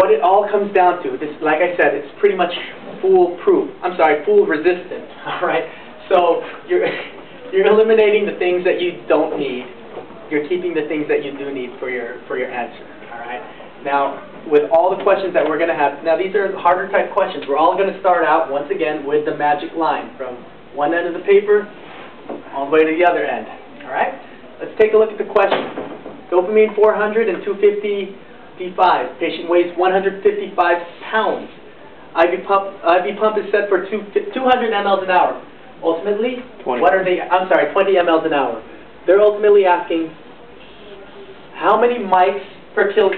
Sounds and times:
Speech: 0.0 - 21.8, 22.4 - 43.1.

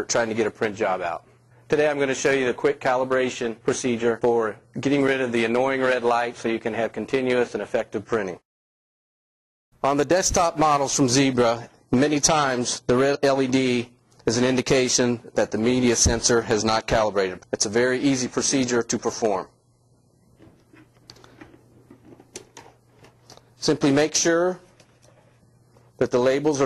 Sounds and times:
Speech: 0.0 - 8.4, 9.8 - 19.6, 23.6 - 24.7, 26.0 - 26.6.

